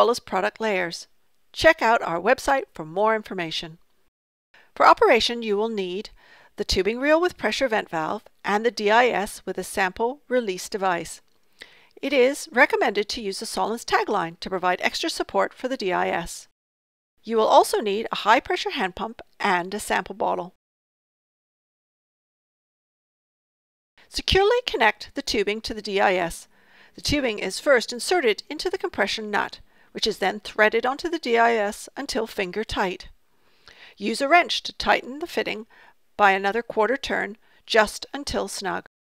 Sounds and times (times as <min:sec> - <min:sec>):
Speech: 0:00.0 - 0:03.8, 0:04.8 - 0:11.2, 0:12.0 - 0:16.5, 0:17.2 - 0:20.6, 0:24.1 - 0:33.2, 0:34.0 - 0:38.9.